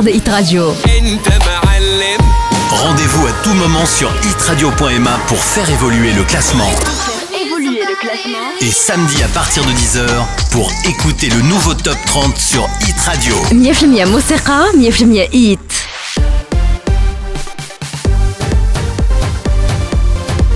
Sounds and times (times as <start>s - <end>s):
Speech: 0.0s - 1.2s, 2.7s - 15.9s
Music: 0.0s - 20.5s.